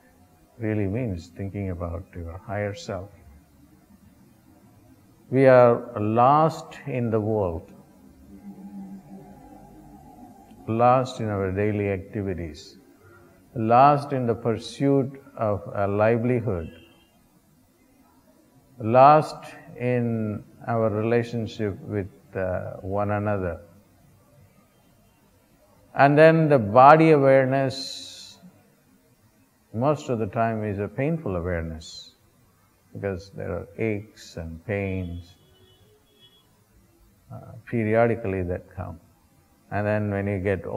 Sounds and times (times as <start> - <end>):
Inside, small room: 0.0 - 40.7
Speech: 0.6 - 3.2, 5.3 - 7.7, 10.6 - 12.8, 13.6 - 16.8, 18.8 - 23.7, 26.0 - 28.5, 29.7 - 32.2, 33.0 - 35.4, 37.3 - 39.0, 39.7 - 40.7.